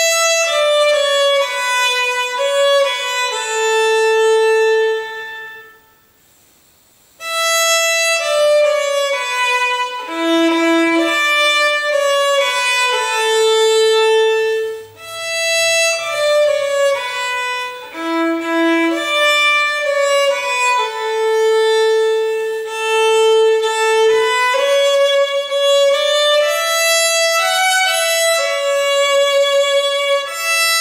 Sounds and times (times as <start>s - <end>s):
Violin, fiddle: 0.0s - 5.8s, 7.2s - 30.8s.